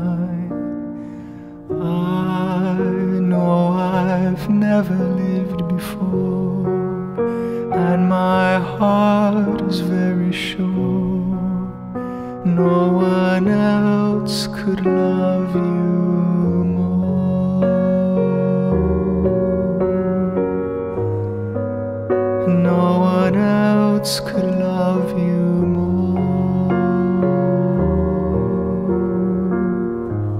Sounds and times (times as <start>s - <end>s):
Electric piano: 0.0s - 30.3s.